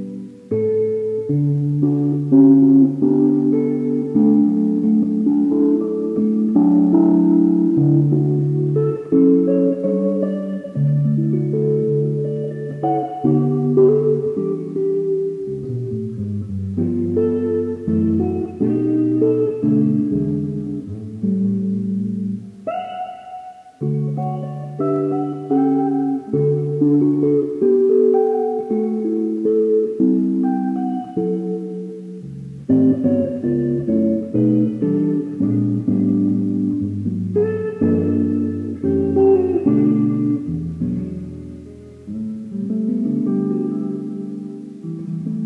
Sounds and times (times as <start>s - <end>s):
Guitar: 0.0s - 45.4s.